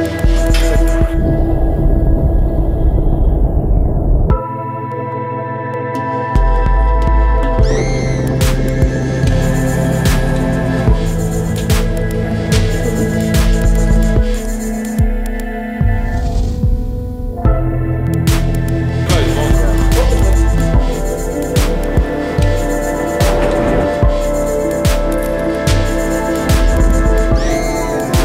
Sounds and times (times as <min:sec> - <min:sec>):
Music: 0:00.0 - 0:28.2.